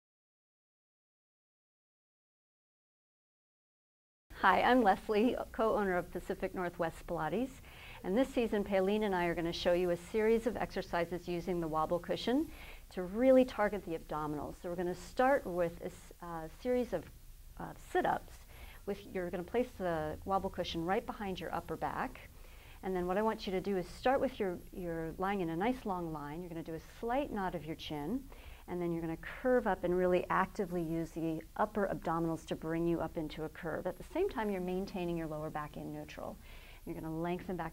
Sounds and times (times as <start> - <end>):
Speech: 4.4 - 37.7.